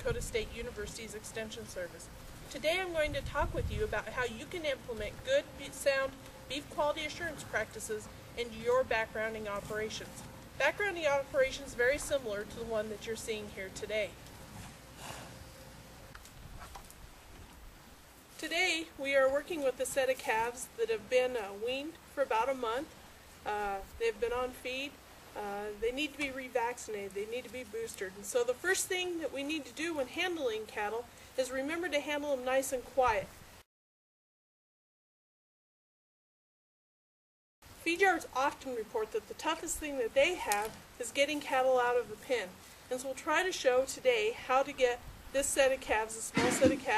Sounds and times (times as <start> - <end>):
Speech: 0.0 - 14.2, 18.4 - 22.9, 23.5 - 33.3, 37.8 - 46.9.